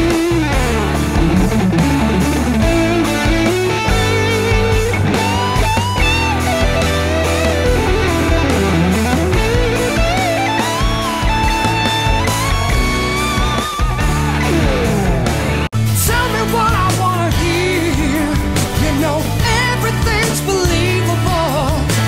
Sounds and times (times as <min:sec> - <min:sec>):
Electric guitar: 0:00.0 - 0:22.0.